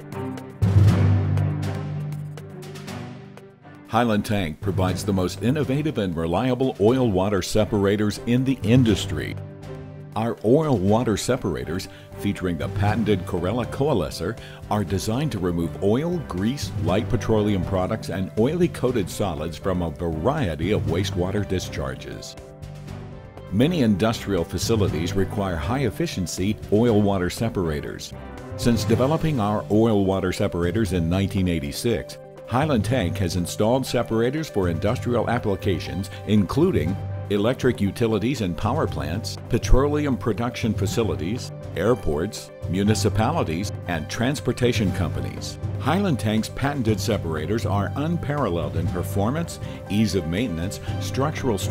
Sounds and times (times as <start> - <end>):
Music: 0.0 - 51.7
Speech: 3.9 - 9.4, 10.2 - 22.4, 23.5 - 51.7.